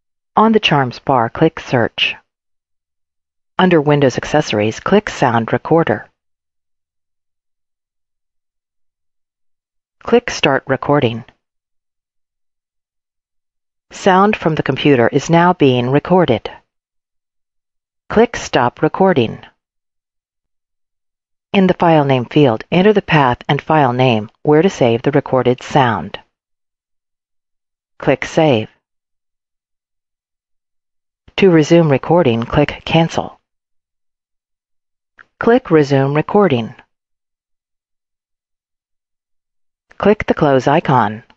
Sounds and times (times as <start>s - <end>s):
Speech: 0.4s - 2.2s, 3.6s - 6.1s, 10.0s - 11.3s, 14.0s - 16.6s, 18.1s - 19.5s, 21.6s - 26.2s, 28.0s - 28.7s, 31.4s - 33.4s, 35.4s - 36.9s, 40.0s - 41.3s.